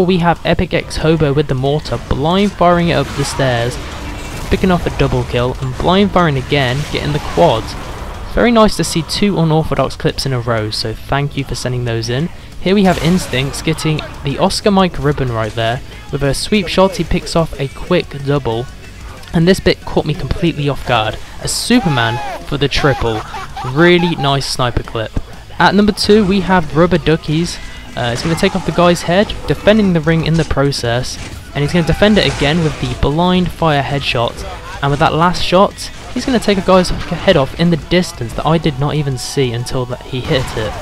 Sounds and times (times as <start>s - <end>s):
Speech: 0.0s - 3.8s, 4.5s - 40.8s.